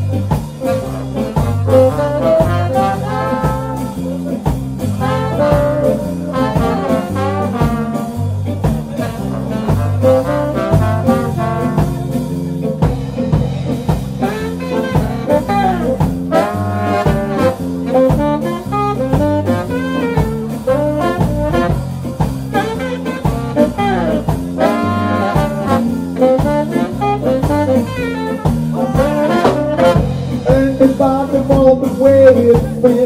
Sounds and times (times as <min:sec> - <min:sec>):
Jazz: 0:00.0 - 0:33.0
Speech: 0:03.8 - 0:04.6, 0:08.5 - 0:09.6.